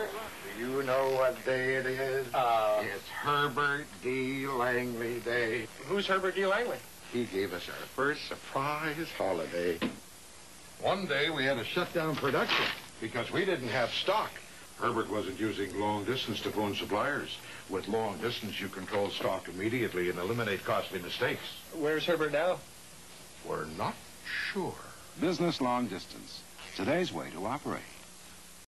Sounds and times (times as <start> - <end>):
Speech: 0.0 - 9.9, 10.8 - 22.6, 23.4 - 28.0.